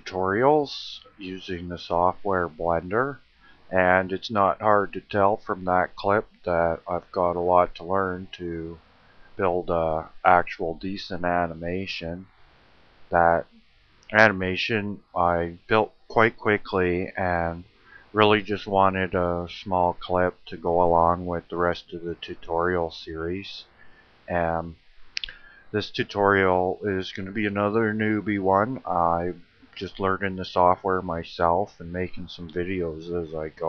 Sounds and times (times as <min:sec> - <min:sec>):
Speech: 0:00.0 - 0:08.8, 0:09.4 - 0:12.2, 0:13.1 - 0:13.5, 0:14.1 - 0:23.7, 0:24.3 - 0:33.6.